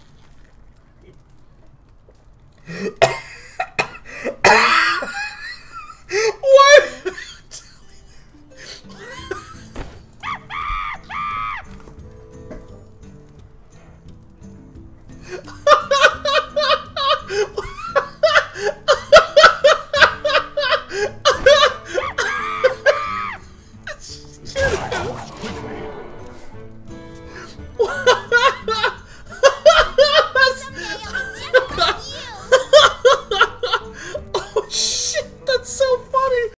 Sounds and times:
Music: 0:03.0 - 0:36.5
Speech: 0:30.4 - 0:32.5, 0:35.1 - 0:36.5.

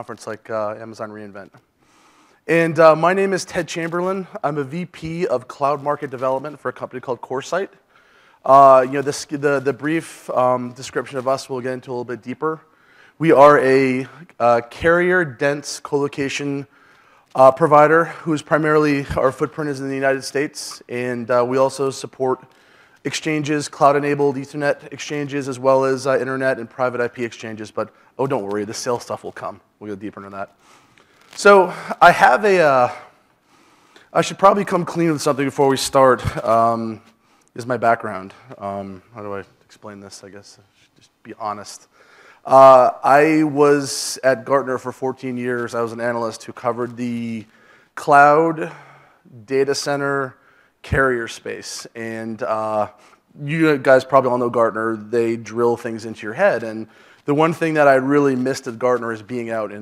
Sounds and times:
Speech: 0:00.0 - 0:01.6, 0:02.5 - 0:07.8, 0:08.4 - 0:16.7, 0:17.4 - 0:30.6, 0:31.4 - 0:33.2, 0:34.1 - 0:41.9, 0:42.5 - 0:59.8.

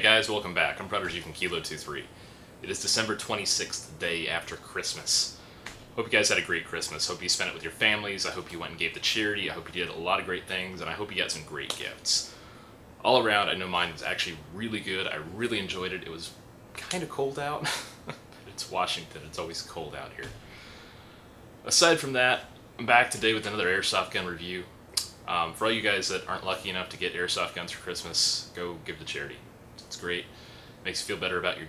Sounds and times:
Speech: 0:00.0 - 0:05.4, 0:06.0 - 0:12.3, 0:13.0 - 0:17.8, 0:18.4 - 0:20.4, 0:21.6 - 0:31.6.

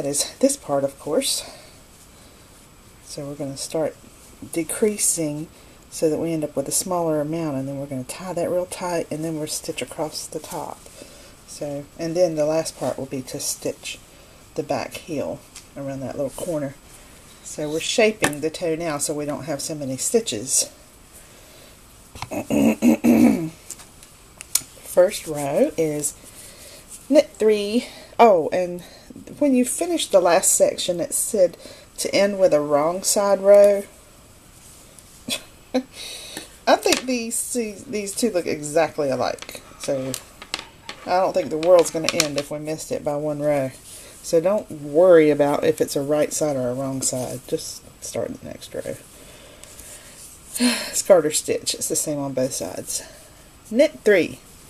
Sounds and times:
Speech: 0:00.0 - 0:01.6, 0:03.1 - 0:10.8, 0:11.5 - 0:14.0, 0:14.6 - 0:16.8, 0:17.4 - 0:20.8, 0:24.9 - 0:26.2, 0:27.1 - 0:34.0, 0:36.7 - 0:40.2, 0:41.1 - 0:49.0, 0:50.6 - 0:54.4
Inside, small room: 0:00.0 - 0:54.7.

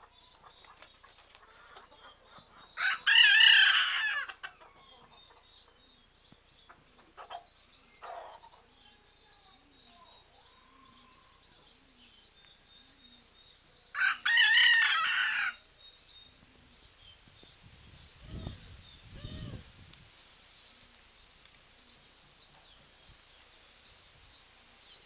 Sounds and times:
Crowing, cock-a-doodle-doo: 0:02.8 - 0:04.3, 0:14.0 - 0:15.6
Cluck: 0:06.7 - 0:08.6.

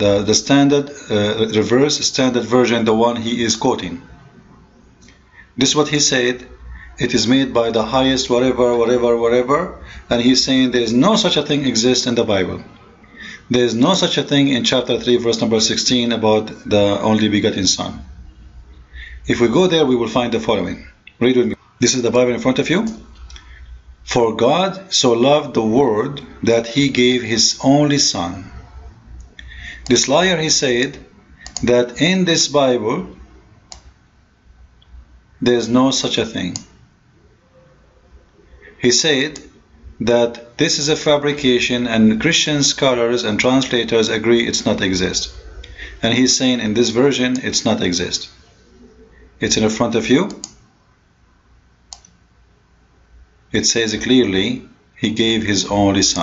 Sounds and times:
Clicking: 0:31.4 - 0:31.7, 0:33.7 - 0:33.9, 0:50.3 - 0:50.6, 0:51.9 - 0:52.2.

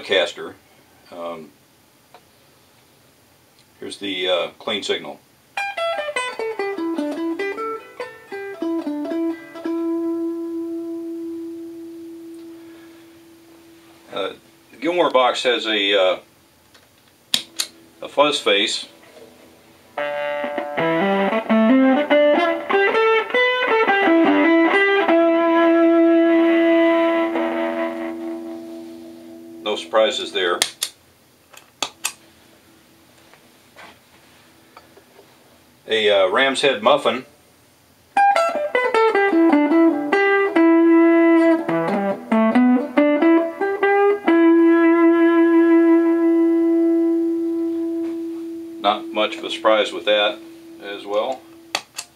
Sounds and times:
Speech: 0:00.0 - 0:01.6, 0:03.8 - 0:05.2, 0:14.1 - 0:16.3, 0:18.0 - 0:19.0, 0:29.6 - 0:30.6, 0:35.8 - 0:37.3, 0:48.8 - 0:51.4
Distortion: 0:00.0 - 0:52.1
Music: 0:05.6 - 0:14.2, 0:19.9 - 0:29.9, 0:38.2 - 0:52.1.

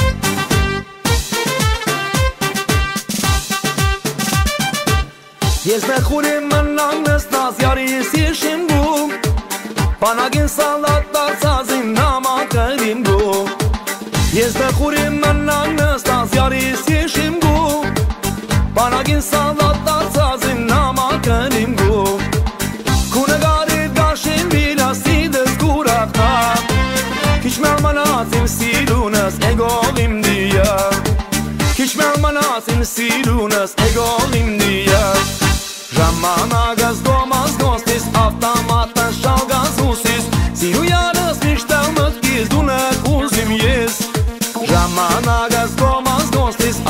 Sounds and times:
Music: 0:00.0 - 0:46.8.

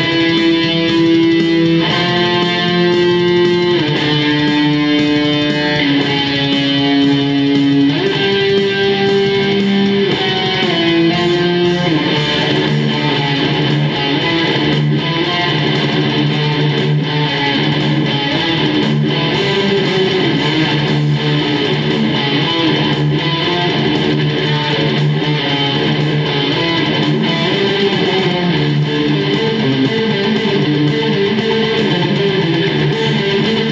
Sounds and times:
Tapping (guitar technique): 0:00.0 - 0:33.7.

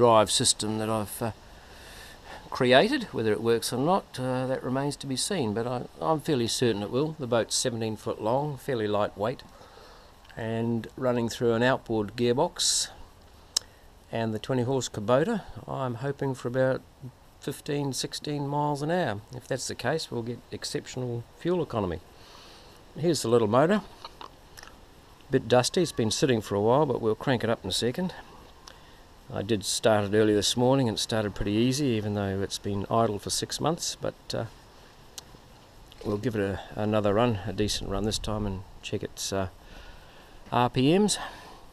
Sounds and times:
Speech: 0:00.0 - 0:01.4, 0:02.5 - 0:09.5, 0:10.3 - 0:13.0, 0:14.1 - 0:22.0, 0:23.0 - 0:23.9, 0:25.3 - 0:28.3, 0:29.3 - 0:34.5, 0:36.0 - 0:39.6, 0:40.5 - 0:41.3.

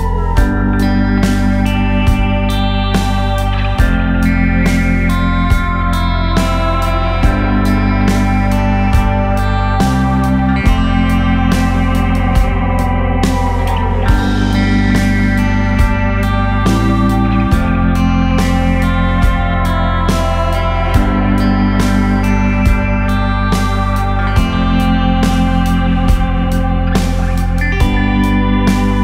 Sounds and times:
Music: 0:00.0 - 0:29.0.

